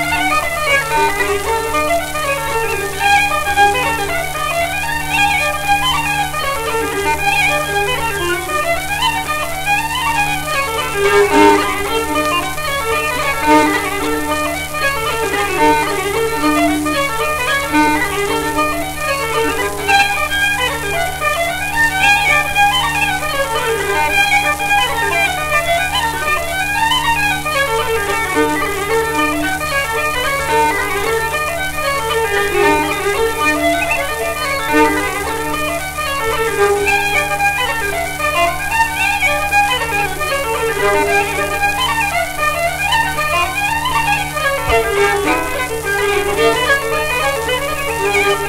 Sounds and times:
Violin, fiddle: 0:00.0 - 0:48.4.

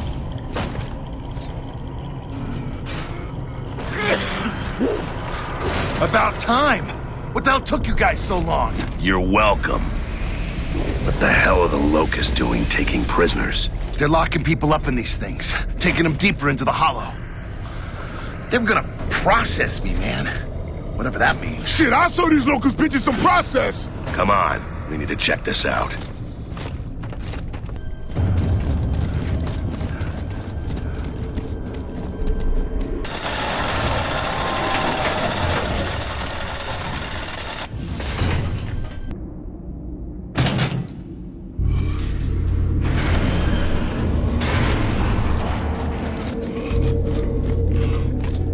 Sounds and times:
Speech: 0:11.1 - 0:17.2, 0:18.5 - 0:26.0.

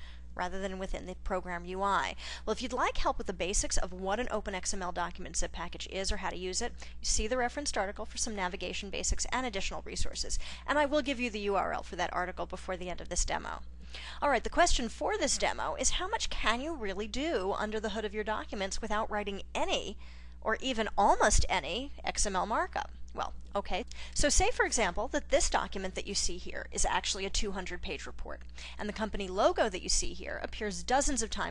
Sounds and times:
Speech: 0:00.4 - 0:13.6, 0:14.2 - 0:31.5.

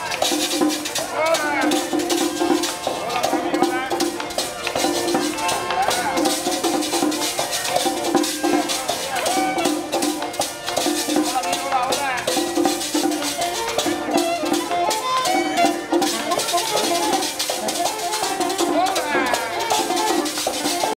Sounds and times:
Traditional music: 0:00.0 - 0:20.9.

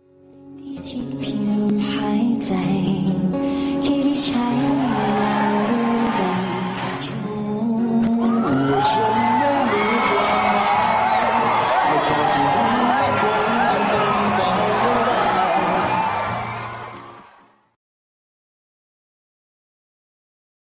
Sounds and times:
Music: 0:00.0 - 0:17.8.

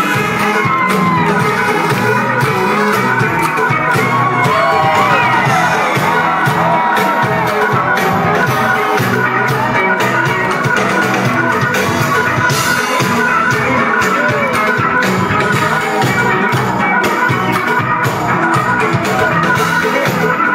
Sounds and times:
Pop music: 0:00.0 - 0:20.5
Ska: 0:00.0 - 0:20.5.

